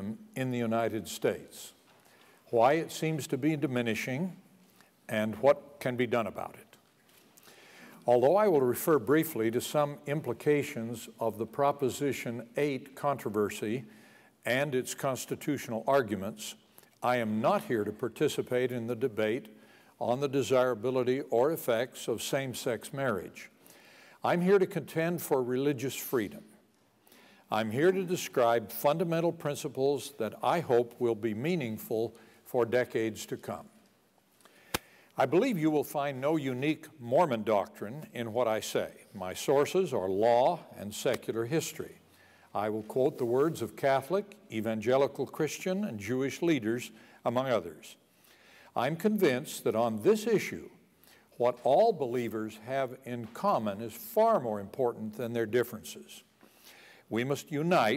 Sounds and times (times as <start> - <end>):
Male speech, man speaking: 0.0 - 1.8, 2.5 - 4.4, 5.1 - 6.8, 8.1 - 13.9, 14.5 - 23.5, 24.2 - 26.5, 27.5 - 33.7, 35.2 - 42.0, 42.6 - 48.0, 48.8 - 50.8, 51.4 - 56.2, 57.1 - 57.9.